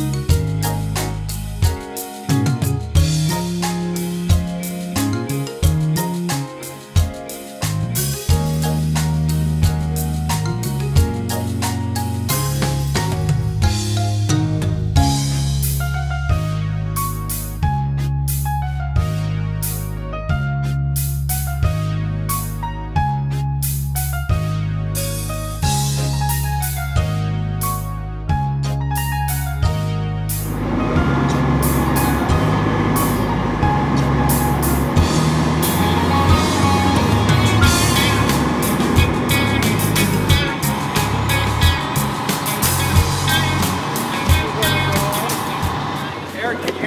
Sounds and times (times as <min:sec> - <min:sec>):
Music: 0:00.0 - 0:46.8.